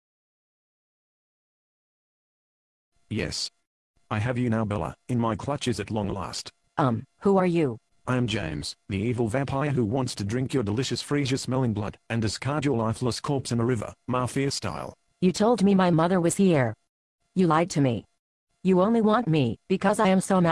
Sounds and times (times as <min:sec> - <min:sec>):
Speech: 0:03.1 - 0:16.8, 0:17.4 - 0:18.1, 0:18.7 - 0:20.5.